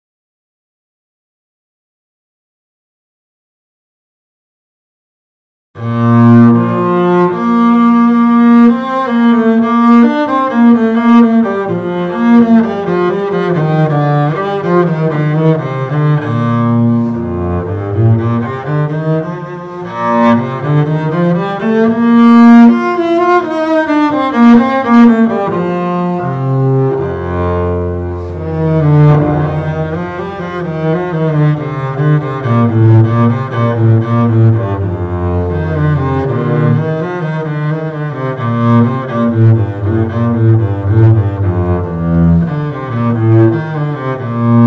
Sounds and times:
Cello: 5.8 - 44.6
Double bass: 5.8 - 44.6.

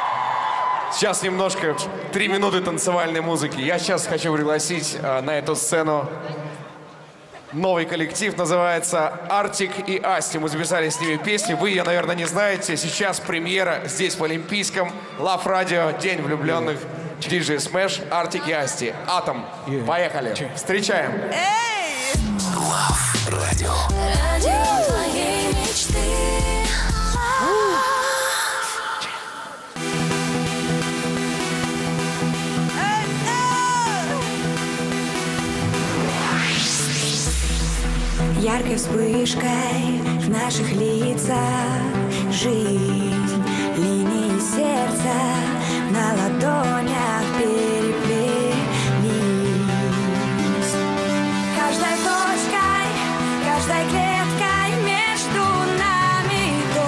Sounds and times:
Music: 21.7 - 56.8.

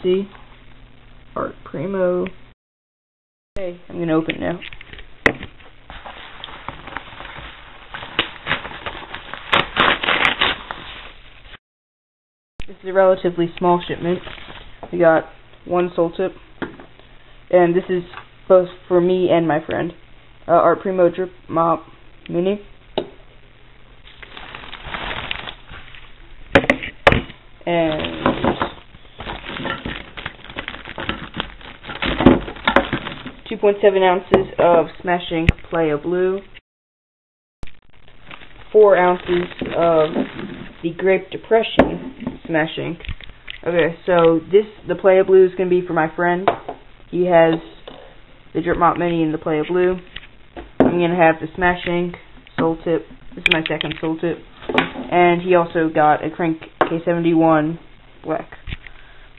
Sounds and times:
Speech: 0.0 - 0.4, 1.4 - 2.4, 3.6 - 4.7, 12.7 - 14.3, 14.9 - 16.4, 17.5 - 22.7, 27.6 - 28.7, 33.5 - 36.5, 38.7 - 46.5, 47.1 - 47.8, 48.6 - 50.1, 50.9 - 54.4, 55.1 - 58.6.

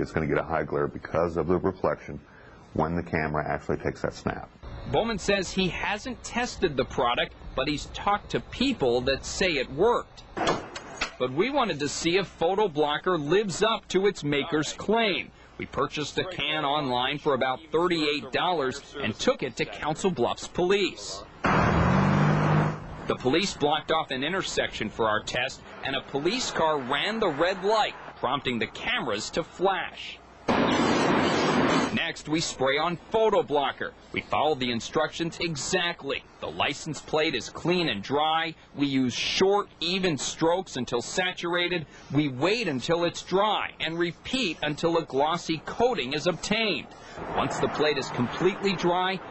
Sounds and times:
Speech: 0.0 - 10.2, 11.2 - 21.3, 23.1 - 30.2, 31.9 - 49.3.

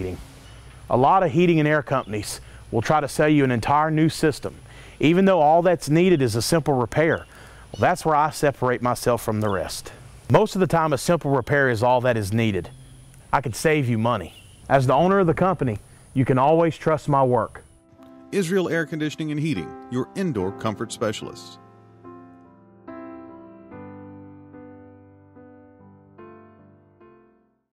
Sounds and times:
Speech: 0.0 - 0.2, 0.9 - 7.2, 7.8 - 12.7, 13.3 - 17.6, 18.3 - 21.6
Music: 16.7 - 27.7.

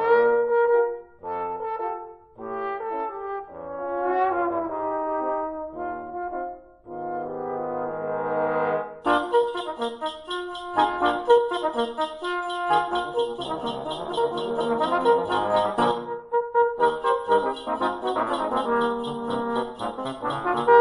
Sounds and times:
Trombone: 0.0 - 20.8.

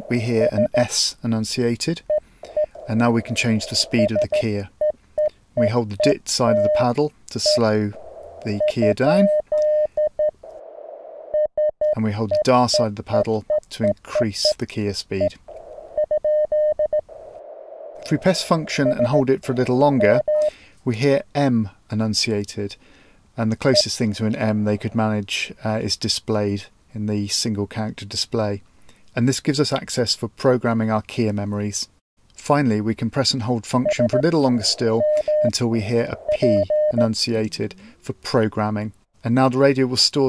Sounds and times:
Radio: 0.0 - 1.0, 2.8 - 4.6, 5.6 - 9.4, 18.0 - 20.2, 23.6 - 25.1, 33.8 - 37.1
Speech: 0.0 - 2.0, 2.9 - 4.7, 5.6 - 9.3, 11.9 - 15.4, 18.0 - 20.2, 20.8 - 22.8, 23.4 - 40.2.

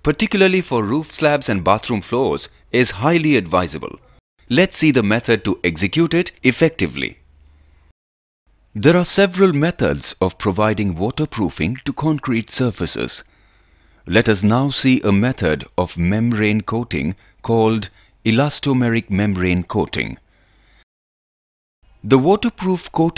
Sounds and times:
Speech: 0.0 - 7.2, 8.8 - 13.3, 14.1 - 20.2, 22.0 - 23.1.

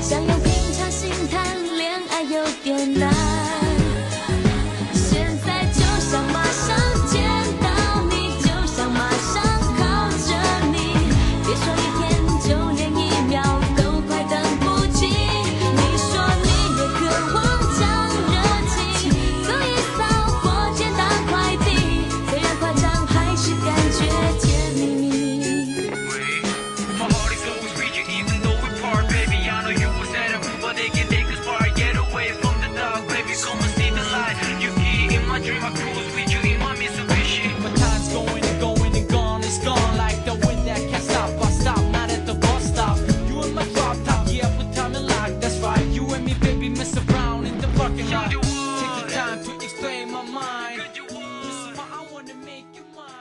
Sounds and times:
Exciting music: 0.0 - 52.4
Pop music: 0.0 - 53.2.

